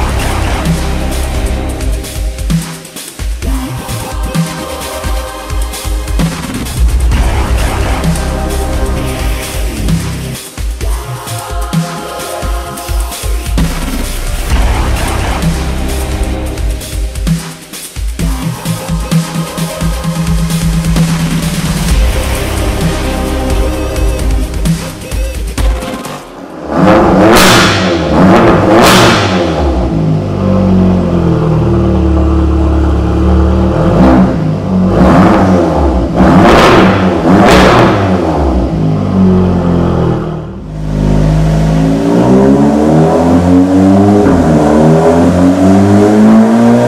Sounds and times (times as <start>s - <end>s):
Music: 0.0s - 46.8s
Sound effect: 6.2s - 10.4s, 13.6s - 16.8s.